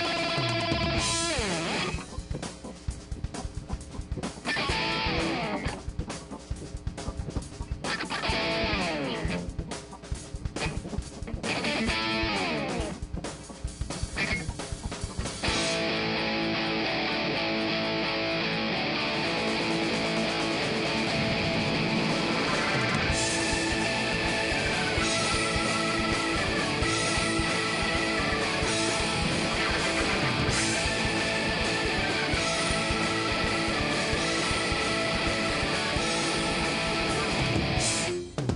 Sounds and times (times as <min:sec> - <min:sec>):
Heavy metal: 0:00.0 - 0:38.5.